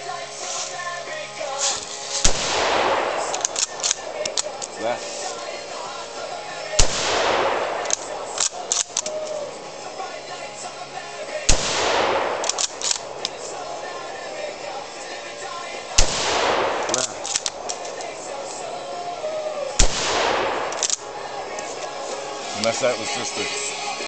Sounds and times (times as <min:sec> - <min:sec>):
Music: 0:00.0 - 0:24.0
Speech: 0:04.8 - 0:05.2, 0:16.9 - 0:17.2, 0:22.5 - 0:23.7.